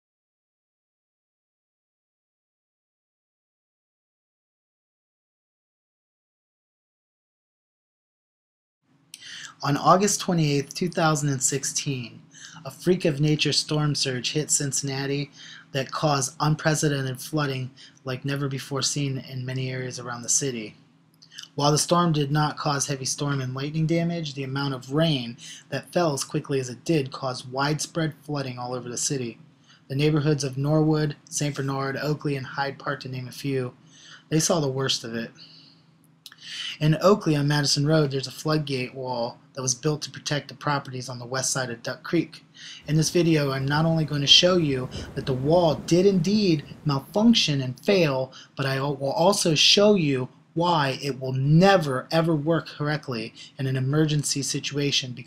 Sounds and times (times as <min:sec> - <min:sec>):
Speech: 0:09.2 - 0:35.6, 0:36.3 - 0:55.2.